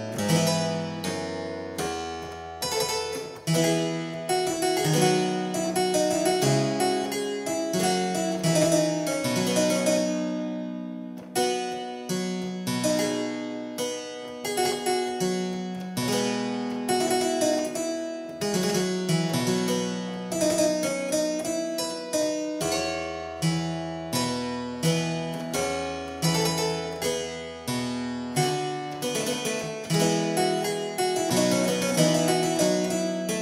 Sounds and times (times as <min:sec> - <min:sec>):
Harpsichord: 0:00.0 - 0:33.4.